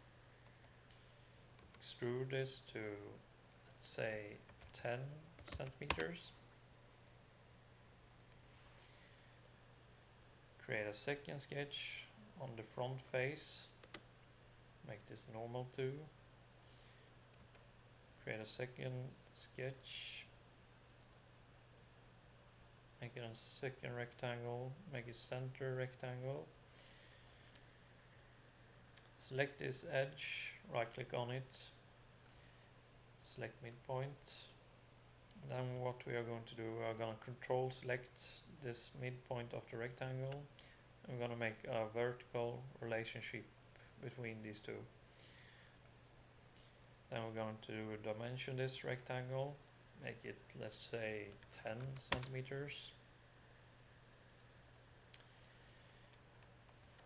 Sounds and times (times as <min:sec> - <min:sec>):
Speech: 0:01.8 - 0:06.4, 0:10.6 - 0:13.8, 0:14.9 - 0:16.2, 0:18.2 - 0:20.4, 0:23.0 - 0:26.6, 0:29.2 - 0:31.8, 0:33.2 - 0:34.6, 0:35.4 - 0:45.0, 0:47.1 - 0:53.0.